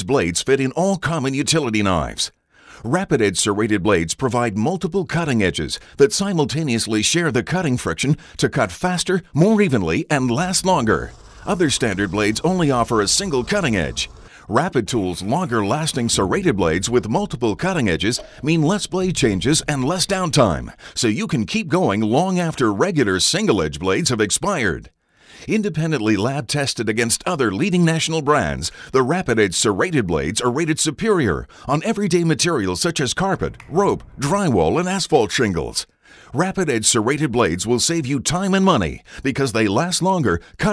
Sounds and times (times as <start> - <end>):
Speech: 0.0 - 40.7.